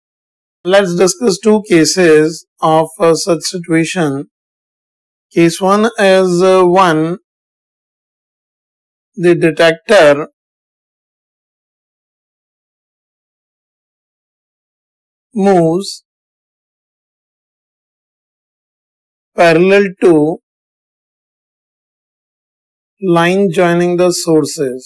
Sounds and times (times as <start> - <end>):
Speech: 0.7 - 4.3, 5.4 - 7.2, 9.2 - 10.4, 15.4 - 16.0, 19.4 - 20.4, 23.0 - 24.8.